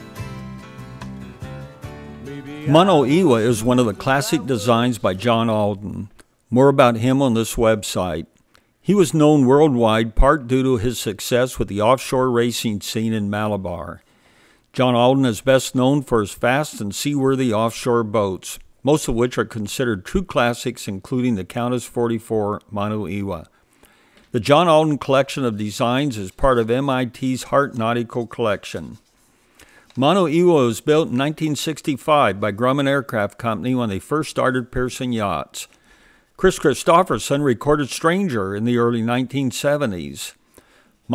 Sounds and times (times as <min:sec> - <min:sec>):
Speech: 0:02.5 - 0:14.0, 0:14.8 - 0:23.5, 0:24.3 - 0:29.1, 0:30.0 - 0:35.8, 0:36.4 - 0:40.4.